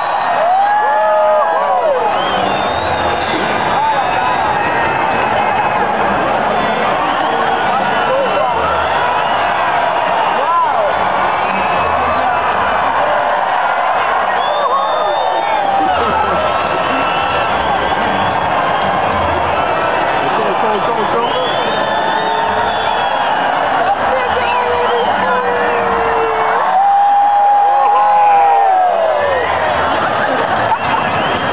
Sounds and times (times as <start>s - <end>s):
Speech: 20.3s - 21.7s, 23.8s - 26.2s.